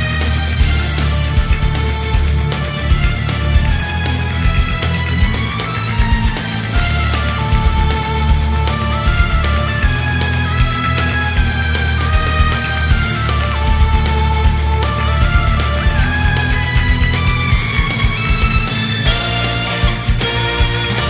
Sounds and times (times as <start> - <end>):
Music: 0.0 - 21.0.